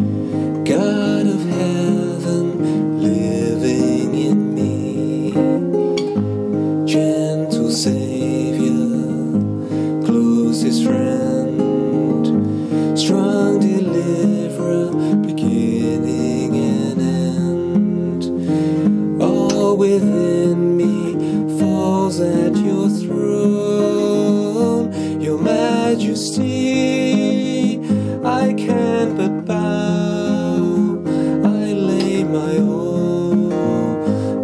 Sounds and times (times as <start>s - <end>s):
Acoustic guitar: 0.0s - 34.4s
Strum: 0.0s - 34.4s.